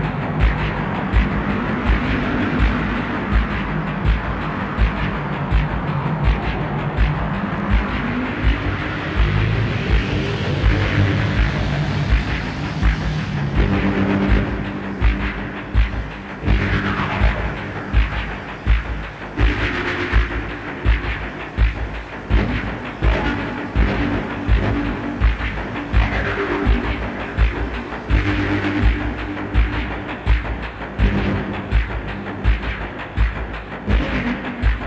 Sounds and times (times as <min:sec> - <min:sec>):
Throbbing: 0:00.0 - 0:34.8.